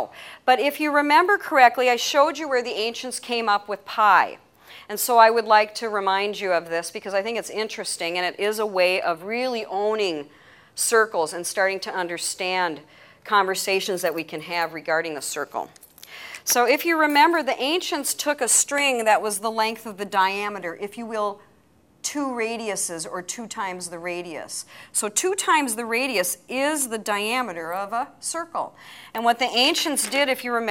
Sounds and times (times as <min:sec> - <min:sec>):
Speech: 0:10.8 - 0:15.8, 0:22.1 - 0:30.7.